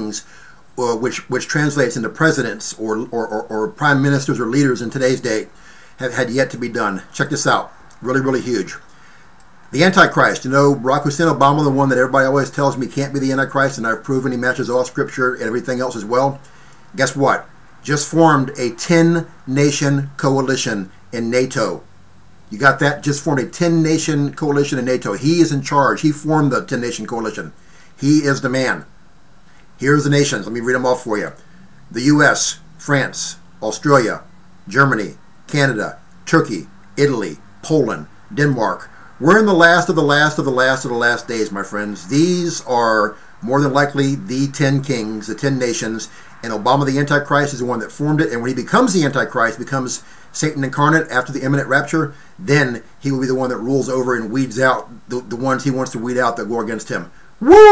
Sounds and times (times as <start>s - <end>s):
Speech: 0.0s - 8.9s, 9.7s - 21.9s, 22.5s - 28.9s, 29.8s - 57.7s.